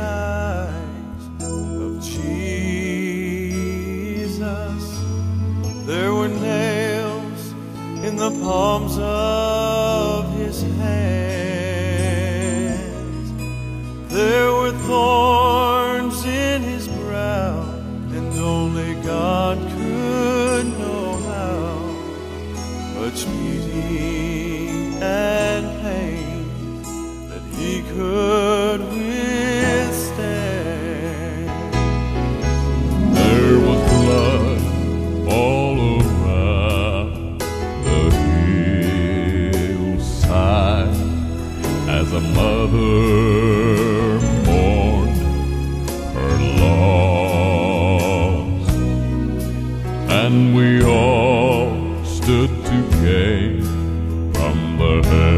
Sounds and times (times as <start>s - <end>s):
Music: 0.0s - 55.3s.